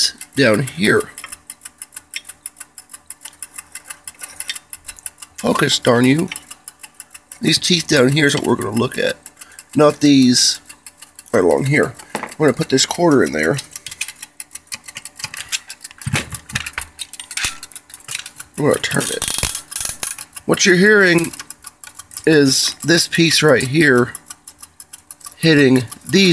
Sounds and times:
Speech: 0:00.0 - 0:01.2, 0:05.4 - 0:06.4, 0:07.4 - 0:09.2, 0:09.8 - 0:10.7, 0:11.3 - 0:13.6, 0:18.6 - 0:19.3, 0:20.5 - 0:21.4, 0:22.2 - 0:24.2, 0:25.4 - 0:26.3
Rattle: 0:00.0 - 0:26.3.

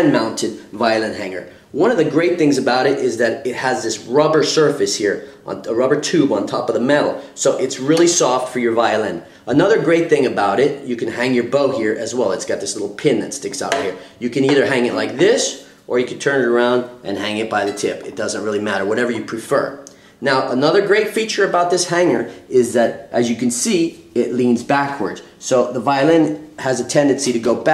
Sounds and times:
Speech: 0:00.0 - 0:27.7.

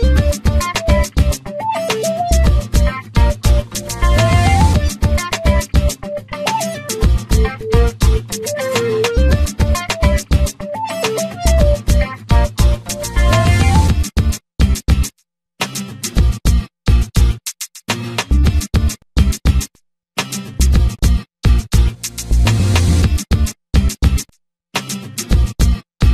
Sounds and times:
Music: 0:00.0 - 0:24.2, 0:24.8 - 0:26.1.

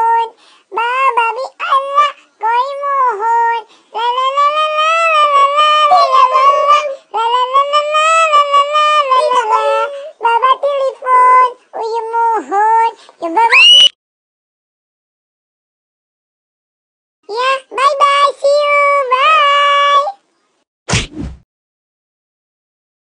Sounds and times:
Speech: 0:01.6 - 0:13.6, 0:17.3 - 0:20.2.

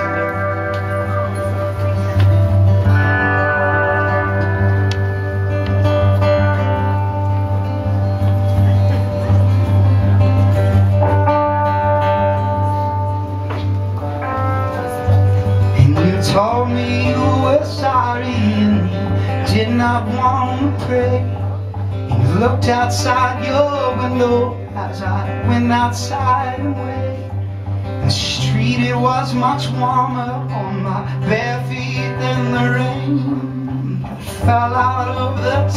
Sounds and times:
Music: 0:00.0 - 0:35.7.

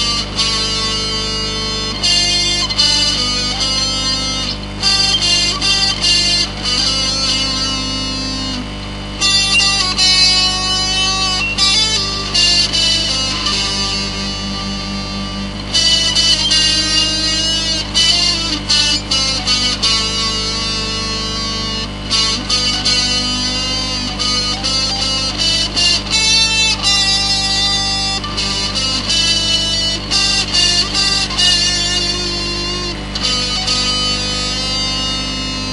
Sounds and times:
Electric guitar: 0:00.0 - 0:35.7.

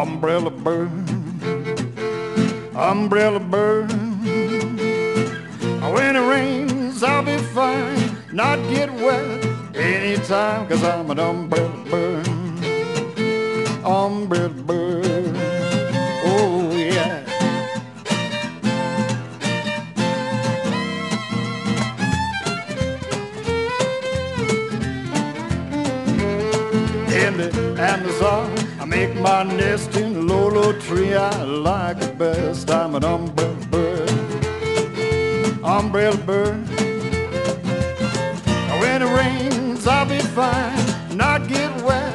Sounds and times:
Music: 0:00.0 - 0:42.1.

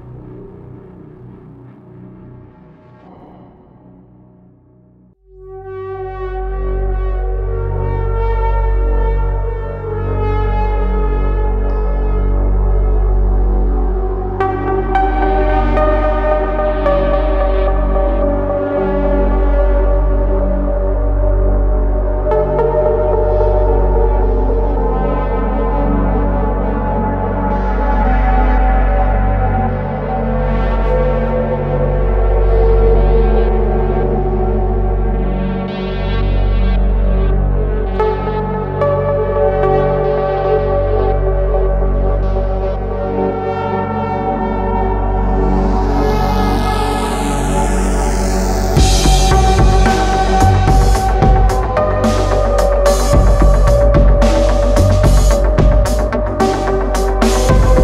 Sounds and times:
Music: 0:00.0 - 0:57.8.

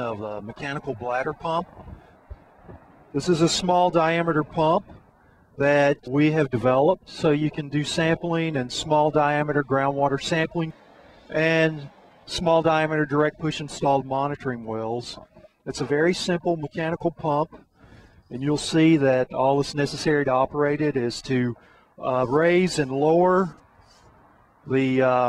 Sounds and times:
Speech: 0:00.0 - 0:01.8, 0:03.2 - 0:05.0, 0:05.6 - 0:17.6, 0:18.3 - 0:23.6, 0:24.7 - 0:25.2.

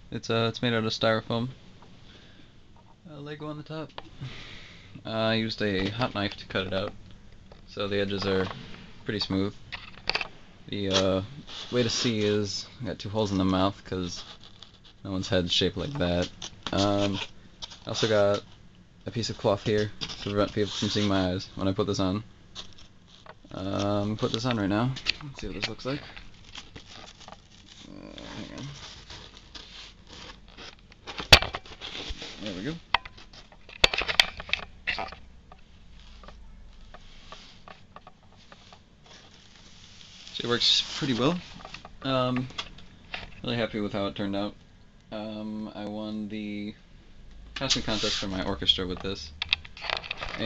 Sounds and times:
Inside, small room: 0:00.0 - 0:50.4
Speech: 0:00.1 - 0:01.6, 0:03.1 - 0:04.0, 0:05.0 - 0:07.0, 0:07.7 - 0:09.6, 0:10.7 - 0:14.3, 0:15.0 - 0:18.5, 0:19.1 - 0:22.3, 0:23.5 - 0:26.2, 0:27.8 - 0:28.8, 0:32.4 - 0:32.8, 0:40.4 - 0:42.6, 0:43.4 - 0:46.8, 0:47.6 - 0:49.4.

